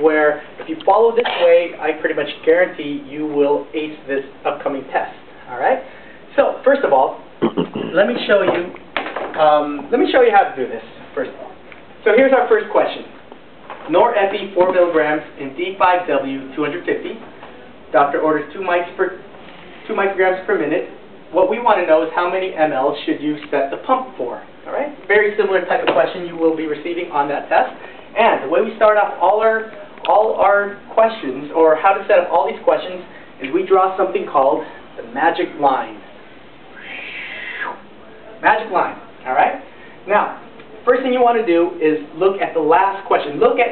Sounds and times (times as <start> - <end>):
Speech: 0.0 - 13.2, 13.9 - 17.2, 17.9 - 19.2, 19.8 - 36.1, 38.1 - 43.7.